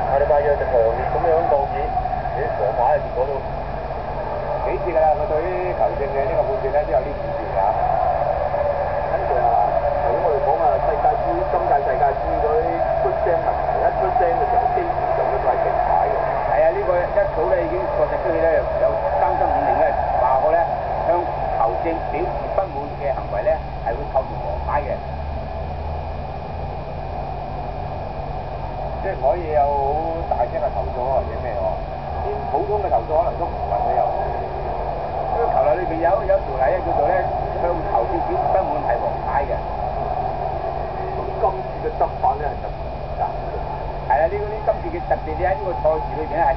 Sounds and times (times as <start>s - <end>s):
Speech: 0.0s - 3.4s, 4.6s - 7.8s, 9.1s - 25.0s, 29.0s - 34.4s, 35.4s - 39.7s, 41.0s - 43.4s, 44.1s - 46.5s.